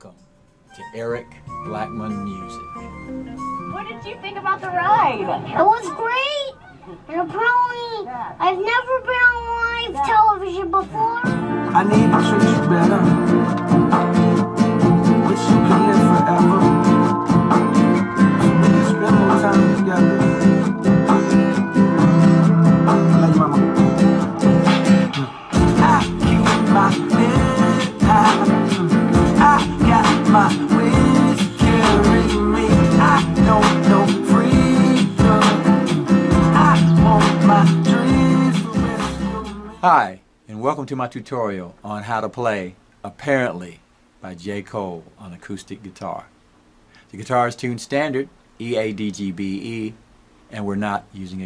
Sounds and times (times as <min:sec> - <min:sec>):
Music: 0:00.0 - 0:05.8, 0:08.7 - 0:39.8.